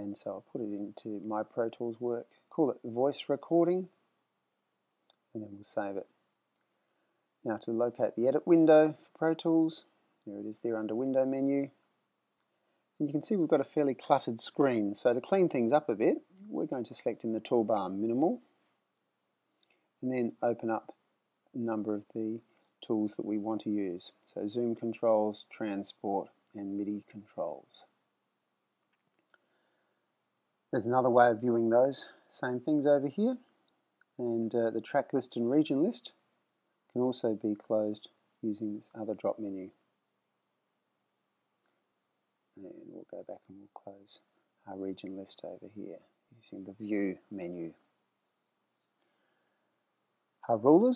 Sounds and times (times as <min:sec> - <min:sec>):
Speech: 0:00.0 - 0:04.0, 0:05.2 - 0:06.2, 0:07.4 - 0:11.8, 0:13.0 - 0:18.5, 0:20.0 - 0:28.0, 0:30.7 - 0:33.6, 0:34.2 - 0:36.2, 0:36.9 - 0:39.8, 0:42.6 - 0:47.9, 0:50.4 - 0:50.9.